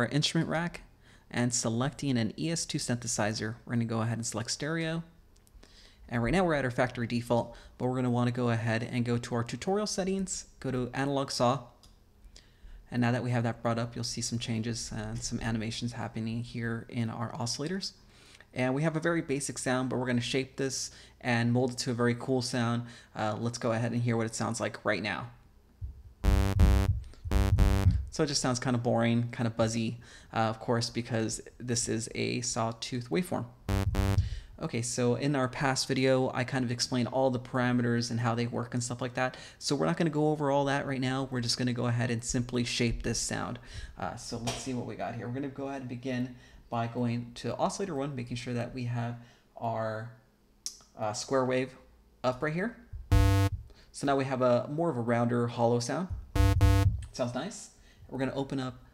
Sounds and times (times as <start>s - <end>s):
Speech: 0.0s - 5.2s, 6.1s - 11.8s, 12.9s - 25.4s, 28.0s - 33.6s, 34.6s - 52.9s, 54.0s - 56.2s, 57.1s - 58.9s.